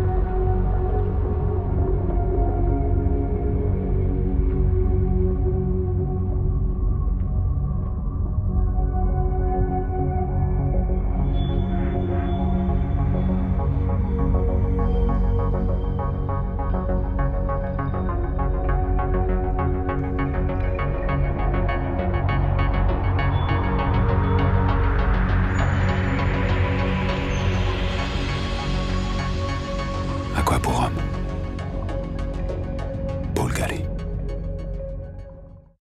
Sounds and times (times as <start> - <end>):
Music: 0.0 - 35.8
Speech: 30.3 - 31.2, 33.3 - 33.9.